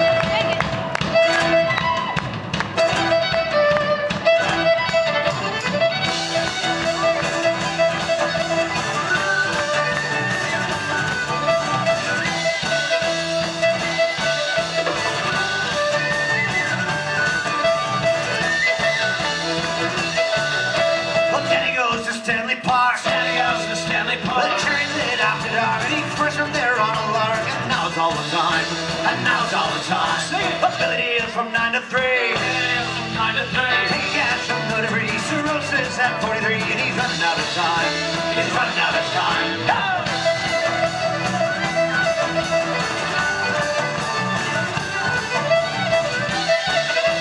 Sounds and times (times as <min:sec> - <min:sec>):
Violin, fiddle: 0:00.0 - 0:22.3, 0:23.1 - 0:47.2.